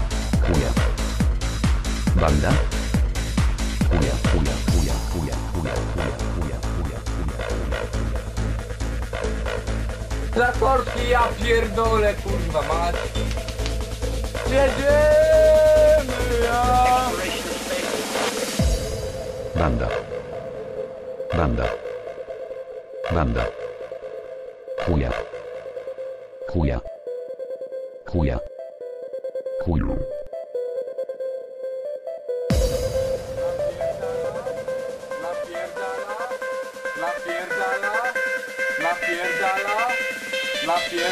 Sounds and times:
Techno: 0.0 - 24.2, 32.5 - 41.1
Speech: 0.4 - 0.8, 2.2 - 2.7, 3.9 - 7.0, 10.4 - 13.0, 14.5 - 18.0, 19.6 - 20.0, 21.3 - 21.8, 23.1 - 23.5, 24.9 - 25.2, 26.5 - 26.9, 28.1 - 28.5, 37.0 - 38.2, 38.8 - 40.0, 40.6 - 41.1.

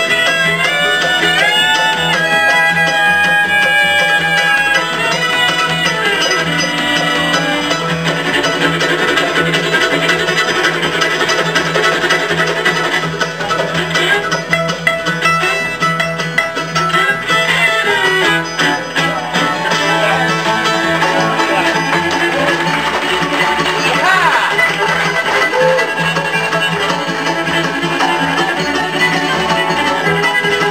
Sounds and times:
Musical instrument: 0.0 - 30.7.

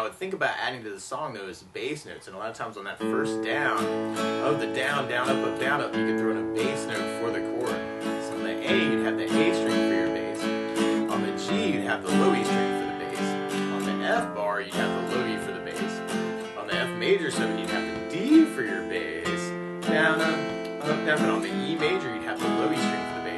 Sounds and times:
Speech: 0.0 - 23.3
Strum: 3.0 - 23.3.

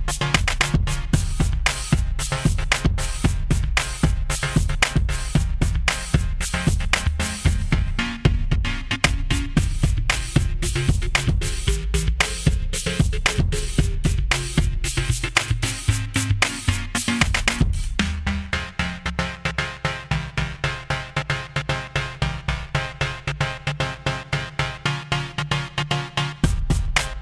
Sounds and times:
Music: 0.0 - 27.2.

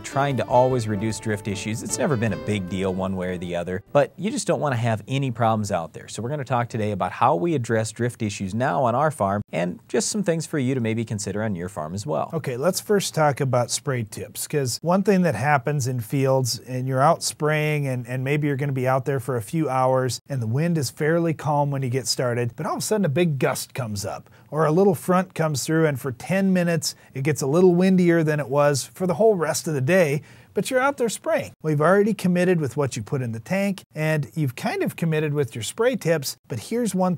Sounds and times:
Speech: 0.0 - 37.1.

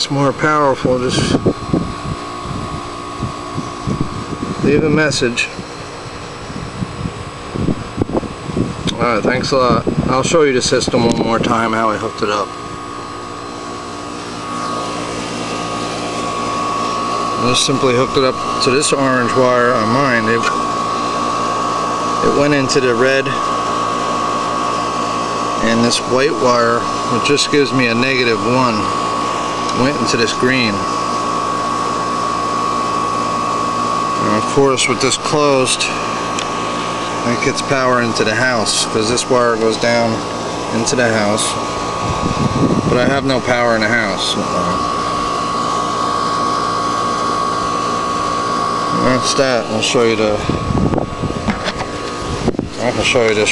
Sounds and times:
Speech: 0.0 - 1.4, 4.6 - 5.6, 8.9 - 12.5, 17.4 - 20.6, 22.2 - 23.4, 25.6 - 29.0, 29.7 - 30.9, 34.2 - 36.0, 37.2 - 41.6, 42.8 - 44.8, 48.9 - 50.6, 52.8 - 53.5.

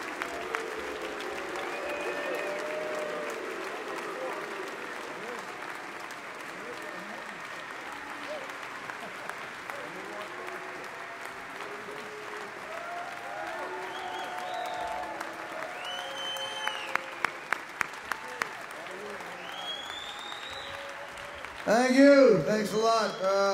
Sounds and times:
Male speech, man speaking: 21.7 - 23.5.

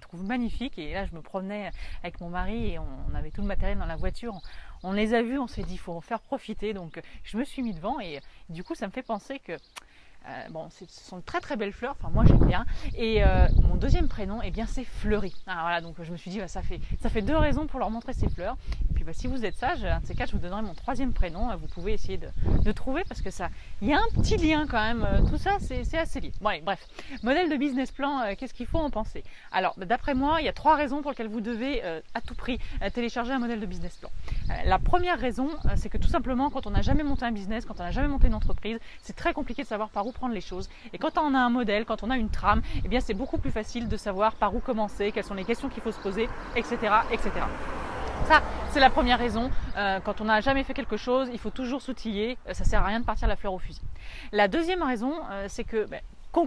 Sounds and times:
Speech: 0.0 - 56.4.

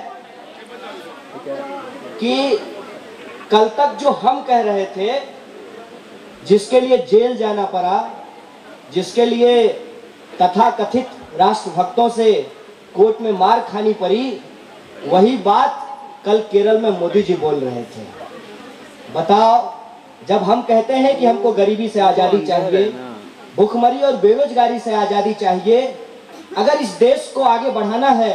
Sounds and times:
Male speech, man speaking: 0.0 - 2.8, 3.5 - 5.3, 6.4 - 8.2, 8.9 - 9.8, 10.4 - 14.4, 15.0 - 18.2, 19.2 - 26.0, 26.6 - 28.3
Narration, monologue: 0.0 - 28.3.

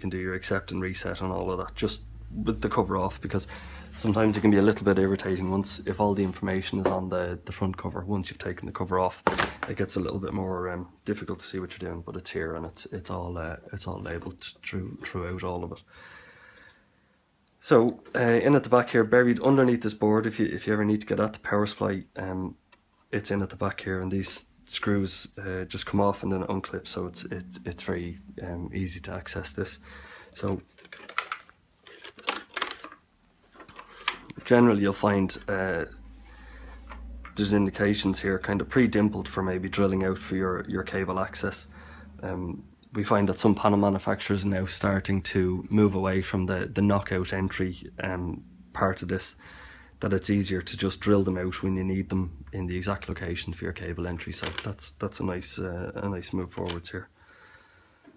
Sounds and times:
Speech: 0.0 - 15.8, 17.6 - 29.8, 30.4 - 30.7, 34.3 - 36.0, 37.3 - 49.4, 50.0 - 57.1.

